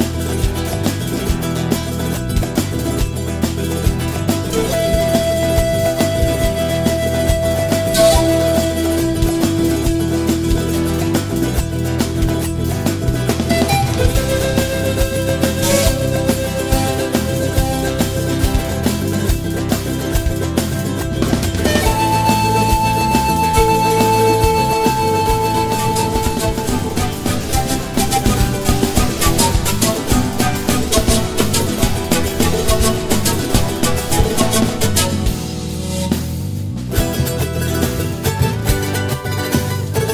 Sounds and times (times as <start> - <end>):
New-age music: 4.2 - 37.8.